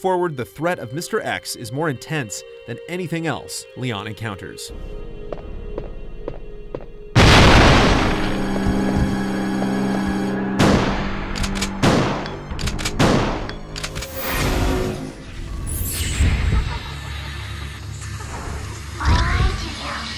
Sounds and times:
Gunshot, gunfire: 7.2s - 8.4s, 10.6s - 12.3s, 12.9s - 13.5s.

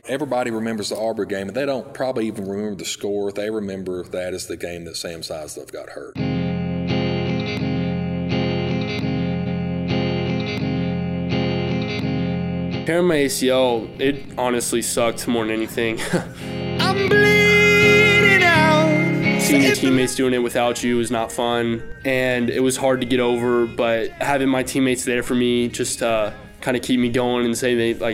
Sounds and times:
Electric guitar: 6.2s - 26.9s.

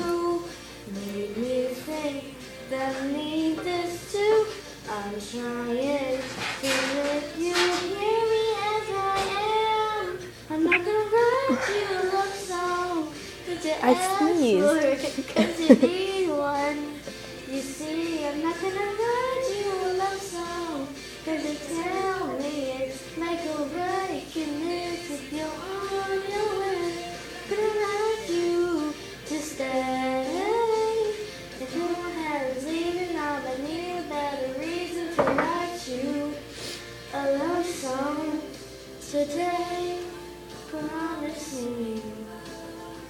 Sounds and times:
Inside, small room: 0.0s - 43.0s
Singing: 0.0s - 43.0s
Speech: 13.8s - 15.2s.

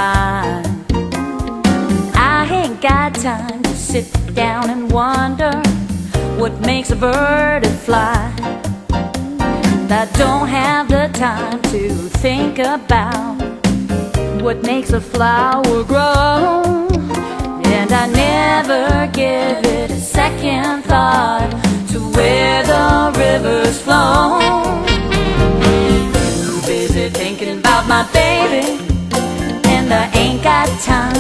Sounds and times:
Happy music: 0.0s - 31.2s.

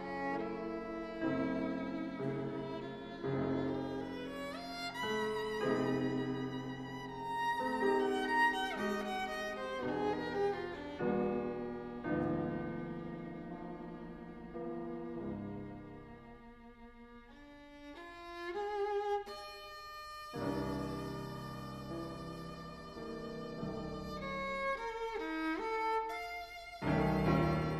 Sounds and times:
Bowed string instrument: 0.0s - 27.7s.

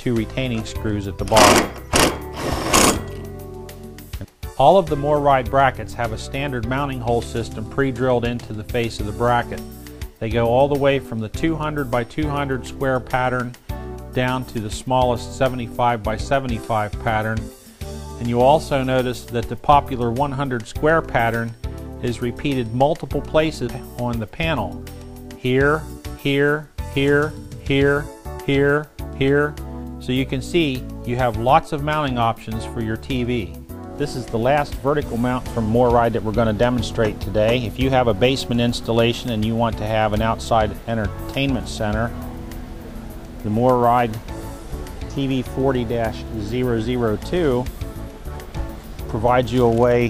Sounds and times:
Speech: 0.0s - 1.7s, 4.6s - 9.6s, 10.2s - 13.6s, 14.2s - 17.5s, 18.2s - 24.8s, 25.4s - 42.2s, 43.4s - 44.2s, 45.1s - 47.7s, 49.1s - 50.0s
Inside, small room: 0.0s - 50.0s
Music: 0.0s - 50.0s.

